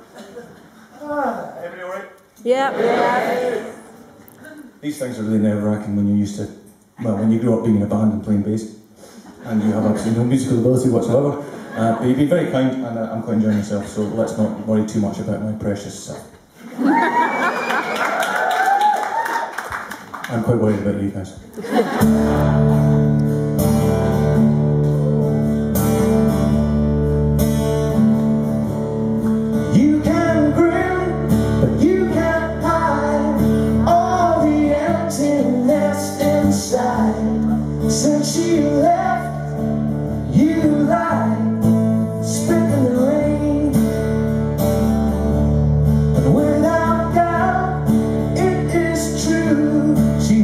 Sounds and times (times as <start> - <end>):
Speech: 9.5 - 16.4, 20.3 - 21.4
Music: 22.0 - 50.4.